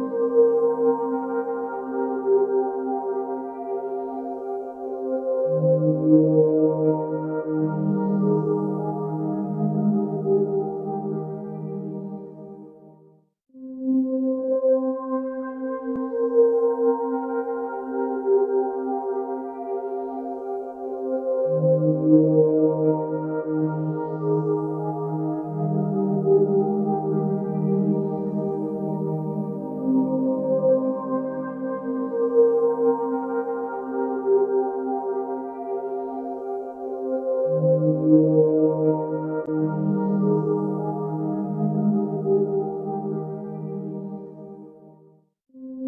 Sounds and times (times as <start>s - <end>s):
Music: 0.0s - 45.8s.